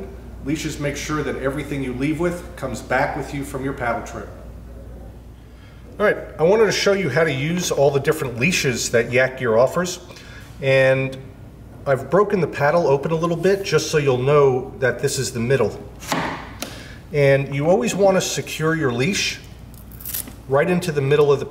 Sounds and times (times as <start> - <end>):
Speech: 0.0 - 5.2, 6.0 - 11.2, 11.8 - 15.8, 17.2 - 19.5, 20.5 - 21.5.